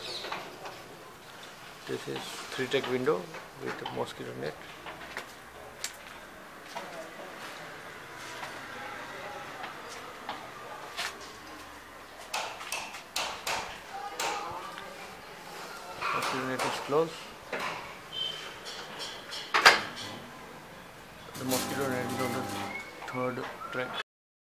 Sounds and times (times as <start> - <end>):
Speech: 1.9 - 4.6, 13.9 - 17.2, 21.4 - 24.0.